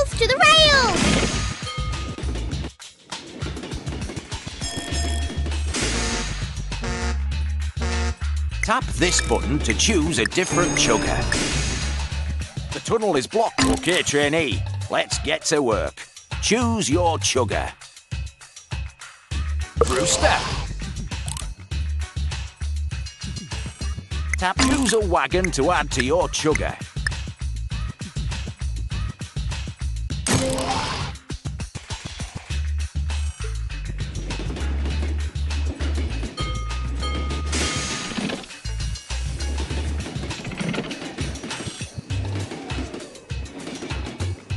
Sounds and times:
Speech: 0:00.0 - 0:01.0, 0:08.6 - 0:11.4, 0:12.8 - 0:17.8, 0:24.4 - 0:26.9
Music: 0:00.0 - 0:44.5.

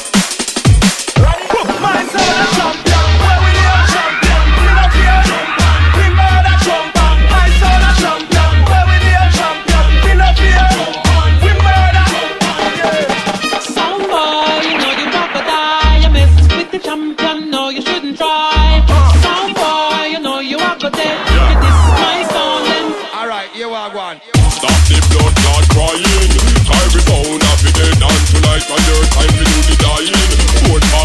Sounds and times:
Music: 0:00.0 - 0:31.0.

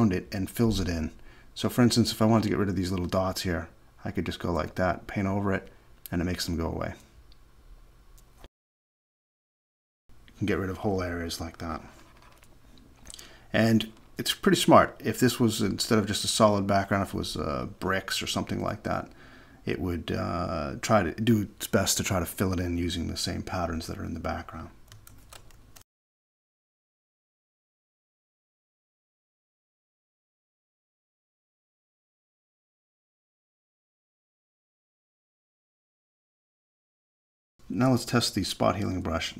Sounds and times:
Speech: 0:00.0 - 0:07.1, 0:10.4 - 0:11.9, 0:13.5 - 0:24.8, 0:37.7 - 0:39.3.

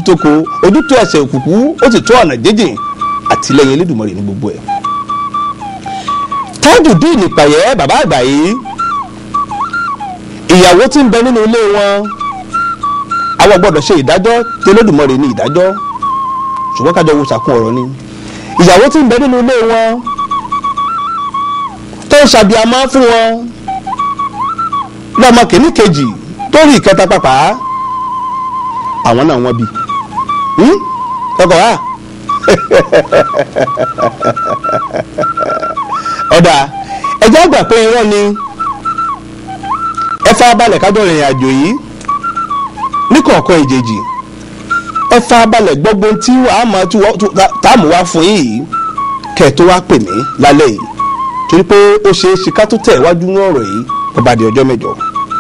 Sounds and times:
Speech: 0:00.0 - 0:04.6, 0:06.6 - 0:08.7, 0:10.5 - 0:12.1, 0:13.4 - 0:15.8, 0:16.8 - 0:18.0, 0:18.6 - 0:20.1, 0:22.1 - 0:23.5, 0:25.2 - 0:27.6, 0:29.1 - 0:29.7, 0:30.6 - 0:31.8, 0:36.3 - 0:38.4, 0:40.2 - 0:41.8, 0:43.1 - 0:44.1, 0:45.1 - 0:48.7, 0:49.4 - 0:50.9, 0:51.5 - 0:55.0
Inside, small room: 0:00.0 - 0:55.4
Music: 0:00.0 - 0:55.4.

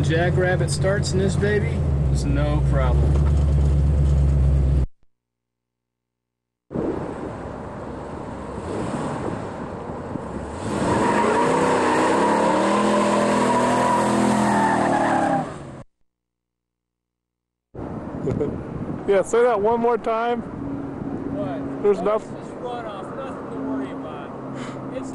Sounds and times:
Tire squeal: 0:10.6 - 0:15.8.

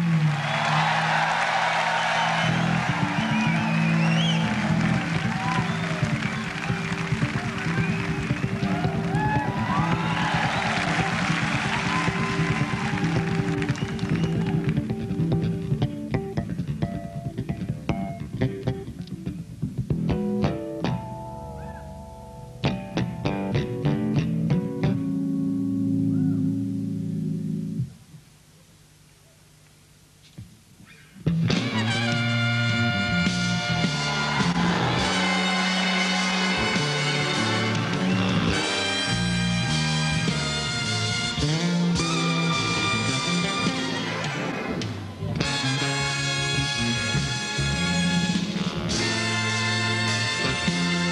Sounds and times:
Music: 0:00.0 - 0:28.0, 0:31.2 - 0:51.1.

